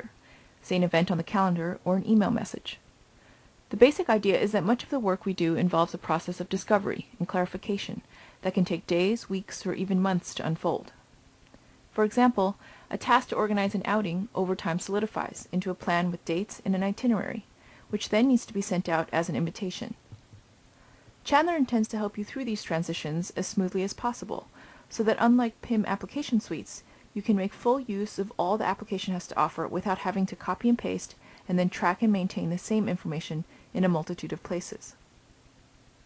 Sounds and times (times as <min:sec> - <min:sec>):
Narration, monologue: 0:00.0 - 0:36.0.